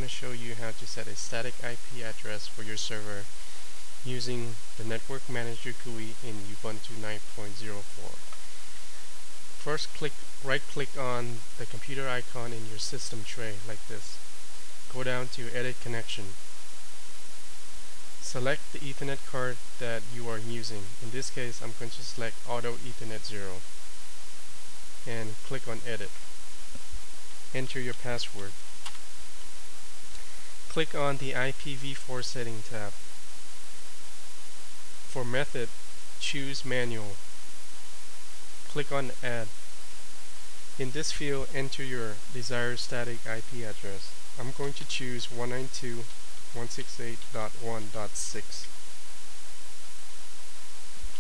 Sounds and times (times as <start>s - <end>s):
Hum: 0.0s - 51.2s.